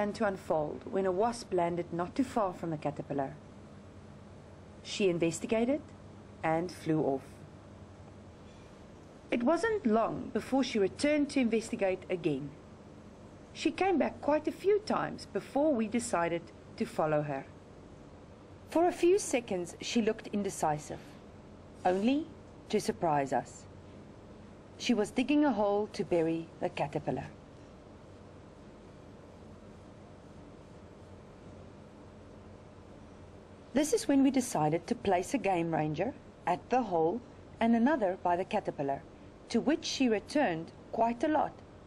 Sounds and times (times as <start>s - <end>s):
Speech: 0.0s - 3.4s, 4.8s - 7.4s, 9.3s - 12.6s, 13.6s - 17.5s, 18.7s - 21.2s, 21.8s - 23.7s, 24.8s - 27.4s, 33.8s - 41.6s.